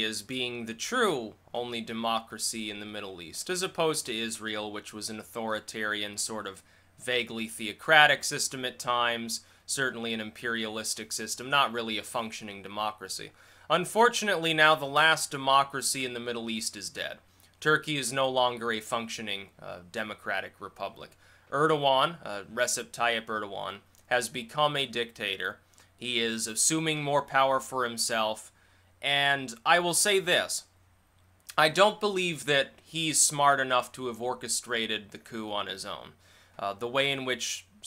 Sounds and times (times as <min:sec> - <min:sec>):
Speech: 0:00.0 - 0:30.7, 0:31.5 - 0:37.8.